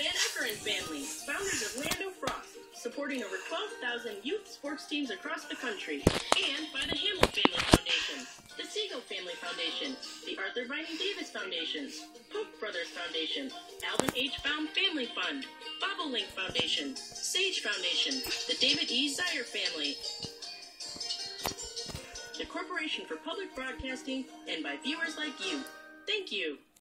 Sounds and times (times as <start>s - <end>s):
Speech: 0.0s - 20.0s, 22.4s - 26.6s
Music: 0.0s - 26.8s.